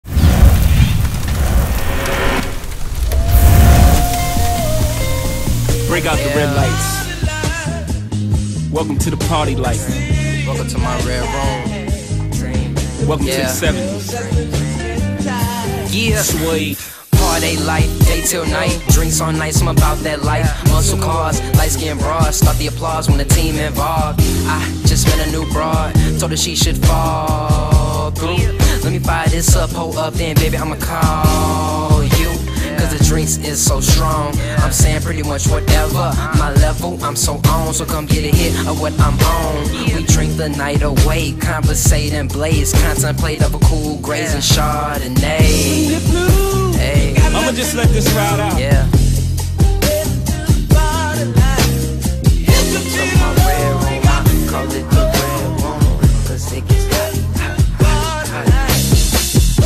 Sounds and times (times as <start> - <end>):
Music: 3.0 - 59.6
Speech: 5.9 - 7.1, 8.7 - 11.6, 13.0 - 14.0, 15.8 - 17.4, 47.2 - 48.9.